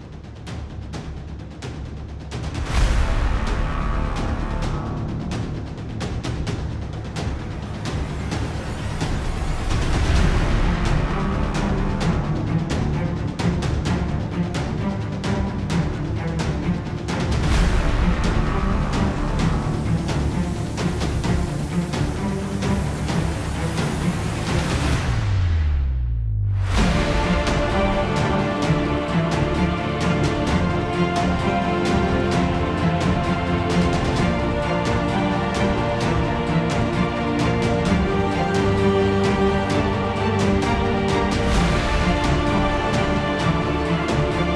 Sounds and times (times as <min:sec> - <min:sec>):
Music: 0:00.0 - 0:44.5.